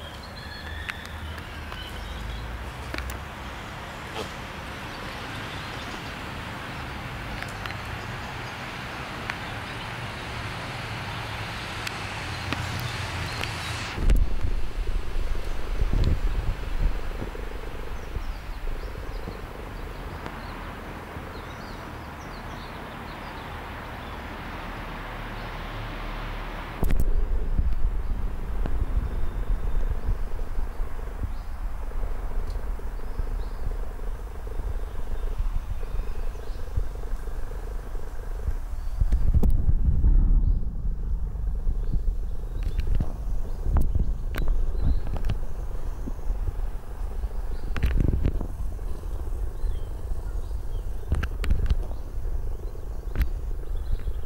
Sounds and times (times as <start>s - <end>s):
Wind: 0.0s - 54.2s.